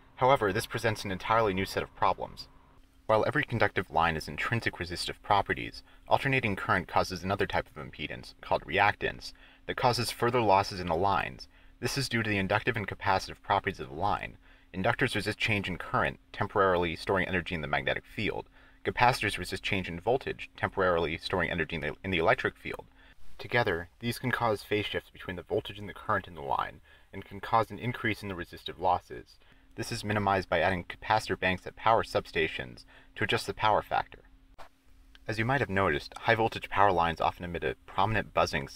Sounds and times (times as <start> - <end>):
Narration, monologue: 0.0 - 38.7.